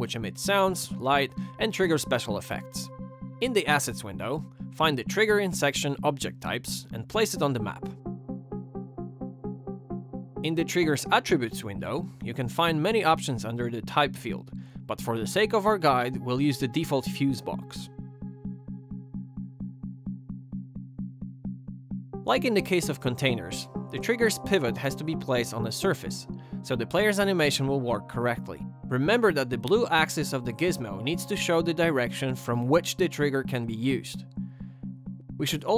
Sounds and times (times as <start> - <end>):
Speech: 0.0 - 7.9, 10.4 - 17.9, 22.3 - 34.2, 35.4 - 35.7
Music: 0.0 - 35.7.